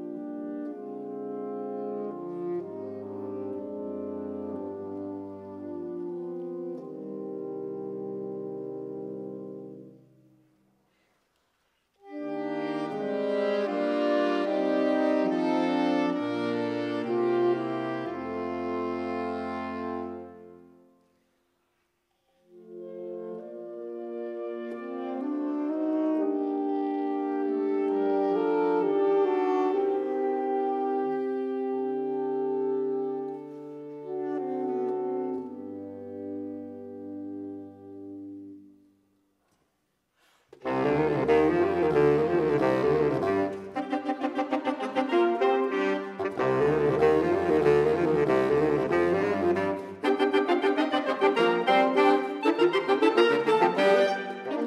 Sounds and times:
Saxophone: 0.0 - 21.5, 22.1 - 39.6, 40.2 - 54.6.

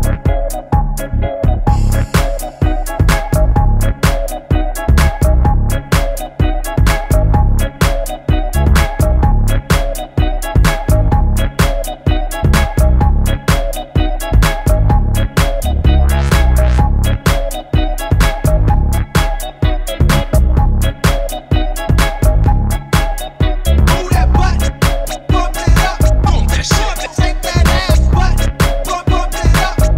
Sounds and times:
Music: 0.0 - 29.9.

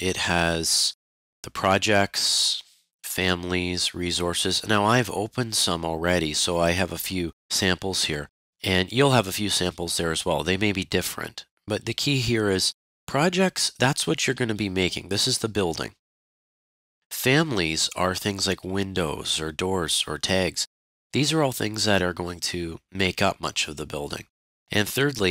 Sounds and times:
Speech synthesizer: 0.0 - 16.0, 17.1 - 25.3.

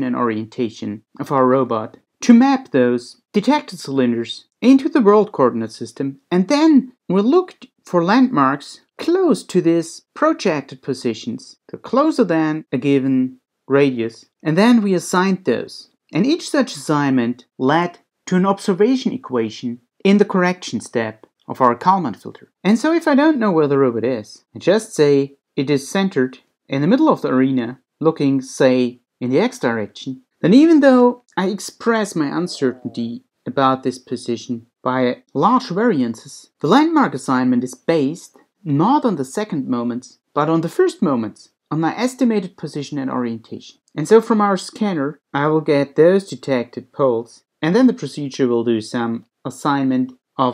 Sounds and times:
Speech: 0.0 - 50.5.

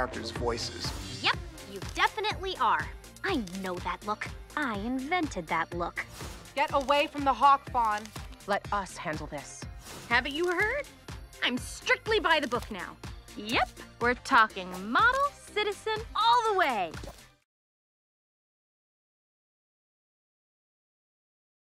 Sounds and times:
Music: 0.0 - 17.5
Speech: 6.6 - 10.8, 11.4 - 17.0.

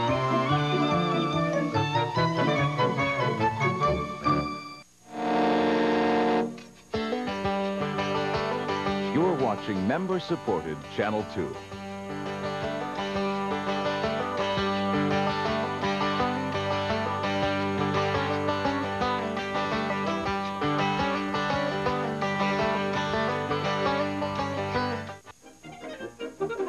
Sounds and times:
Music: 0.0 - 26.6.

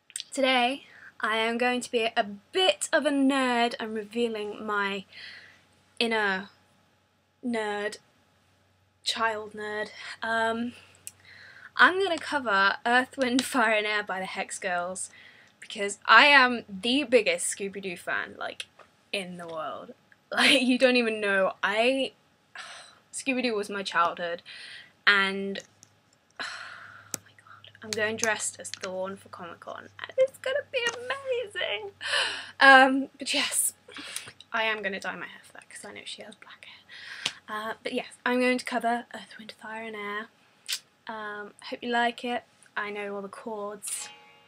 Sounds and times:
Speech: 0.2 - 5.1, 6.0 - 6.5, 7.4 - 8.0, 9.1 - 10.8, 11.8 - 18.6, 19.2 - 24.4, 25.1 - 25.6, 27.7 - 32.0, 32.6 - 33.8, 34.5 - 36.6, 37.5 - 40.3, 41.1 - 44.1.

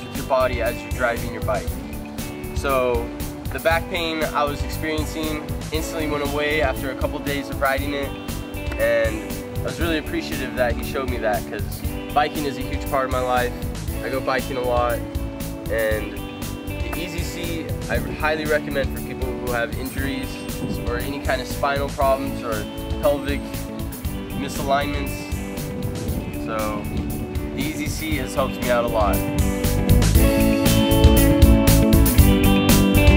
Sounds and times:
Speech: 0.0 - 1.7, 2.7 - 8.1, 8.8 - 15.0, 15.7 - 16.2, 16.8 - 23.4, 24.3 - 25.3, 26.4 - 26.9, 27.6 - 29.2
Music: 0.0 - 33.1.

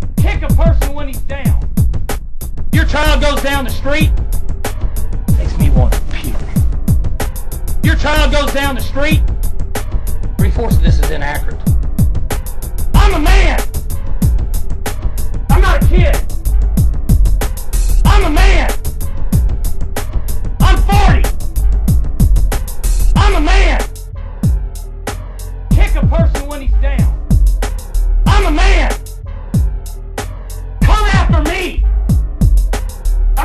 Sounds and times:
Hip hop music: 0.0 - 33.4.

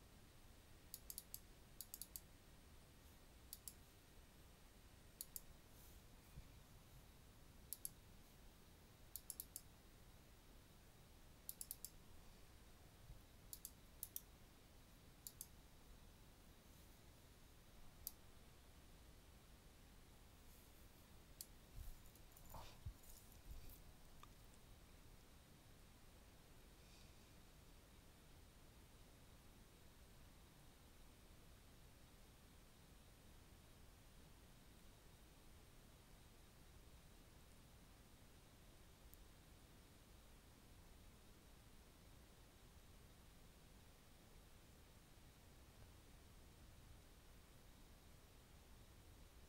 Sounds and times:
Silence: 0.0 - 49.4
Clicking: 0.9 - 2.3, 3.5 - 3.8, 5.2 - 5.5, 7.7 - 8.0, 9.2 - 9.7, 11.5 - 12.0, 13.5 - 14.3, 15.2 - 15.6.

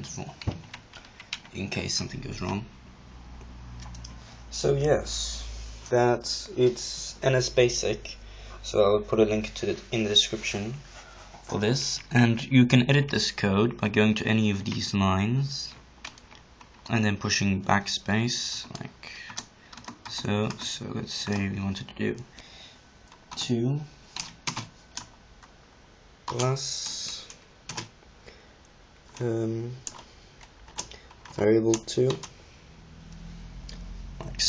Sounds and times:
Speech: 0.0 - 0.5, 1.5 - 2.7, 4.5 - 10.9, 11.5 - 15.8, 16.9 - 19.3, 20.1 - 22.3, 23.4 - 23.9, 26.3 - 27.3, 29.2 - 29.8, 31.4 - 32.2, 34.2 - 34.4
Computer keyboard: 0.4 - 1.6, 16.0 - 16.9, 18.6 - 21.5, 24.2 - 25.1, 26.3 - 27.9, 29.8 - 32.3.

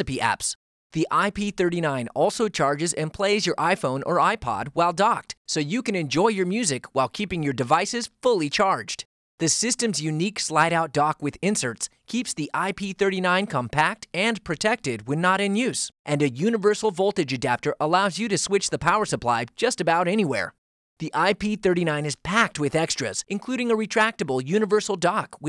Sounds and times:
Speech: 0.0 - 25.4.

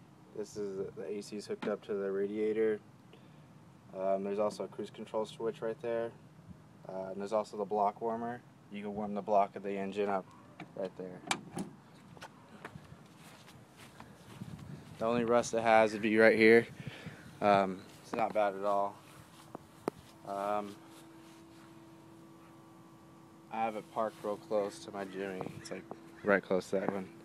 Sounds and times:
Speech: 0.4 - 2.8, 3.9 - 6.2, 6.8 - 11.3, 15.0 - 16.7, 17.4 - 19.0, 20.2 - 20.8, 23.5 - 27.1.

